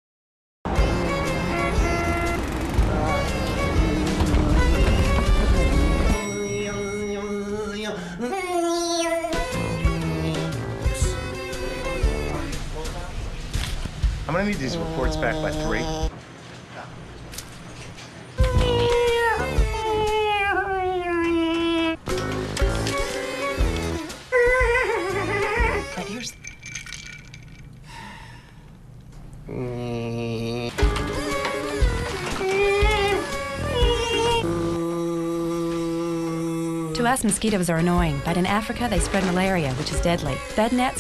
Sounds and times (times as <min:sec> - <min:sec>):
Music: 0:00.7 - 0:16.1, 0:18.4 - 0:20.2, 0:22.0 - 0:26.3, 0:30.8 - 0:41.0
Speech: 0:37.0 - 0:41.0.